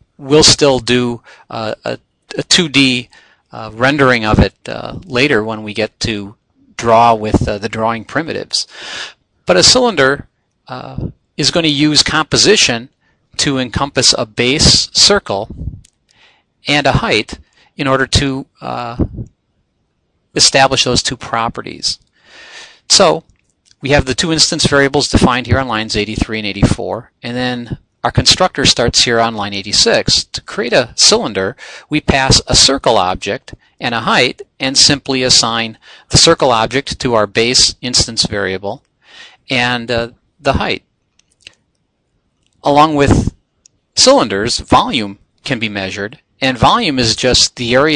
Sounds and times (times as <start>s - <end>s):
Inside, small room: 0.0s - 47.9s
Speech: 0.2s - 15.8s, 16.7s - 19.3s, 20.4s - 22.0s, 22.8s - 38.8s, 39.4s - 40.8s, 42.6s - 43.4s, 44.0s - 47.9s.